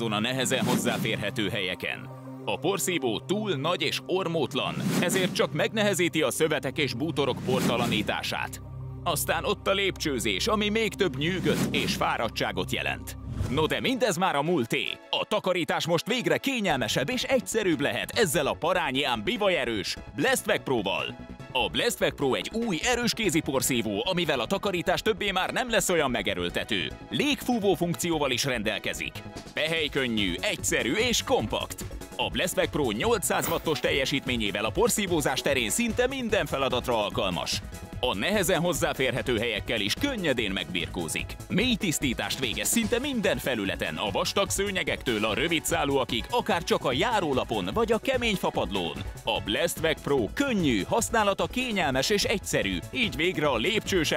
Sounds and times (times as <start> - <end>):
Music: 0.0 - 54.1
Speech: 0.0 - 54.1.